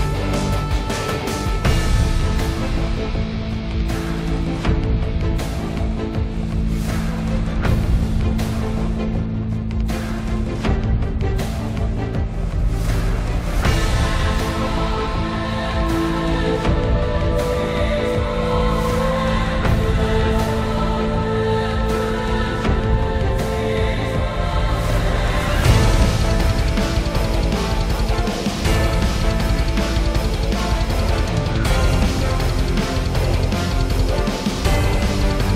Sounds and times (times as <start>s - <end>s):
Music: 0.0s - 35.5s.